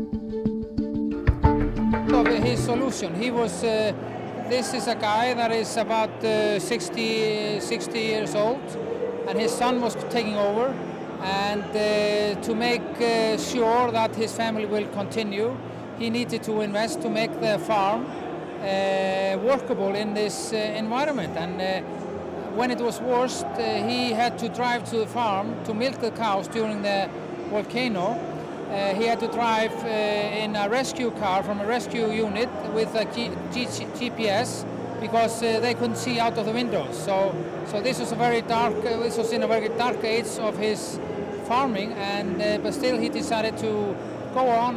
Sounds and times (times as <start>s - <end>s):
Speech: 2.1s - 21.9s, 22.5s - 44.7s.